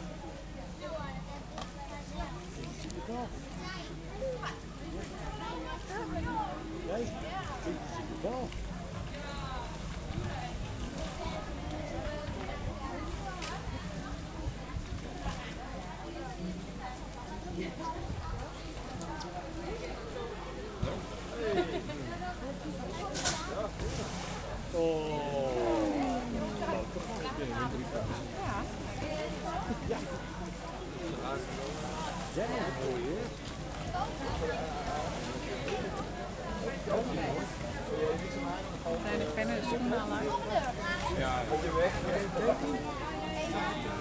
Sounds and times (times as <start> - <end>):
Speech: 0.0 - 44.0.